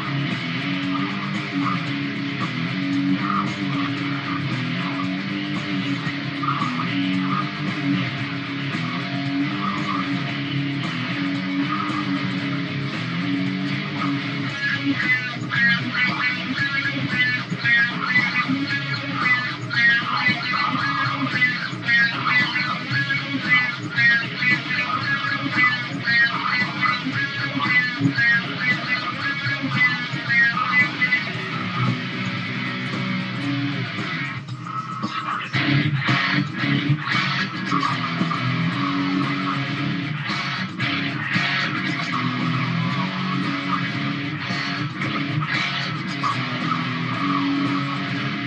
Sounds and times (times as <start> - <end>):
Electric guitar: 0.0 - 48.4
Strum: 0.0 - 48.4.